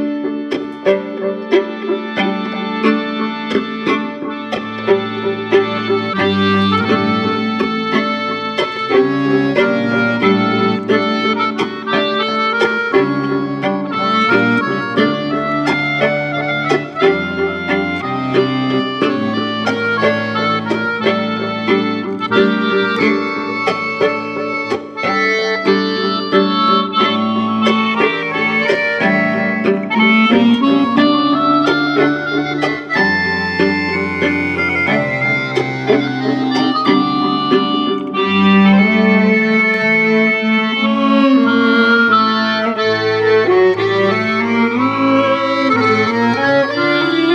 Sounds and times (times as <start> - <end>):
Music: 0.0 - 47.3.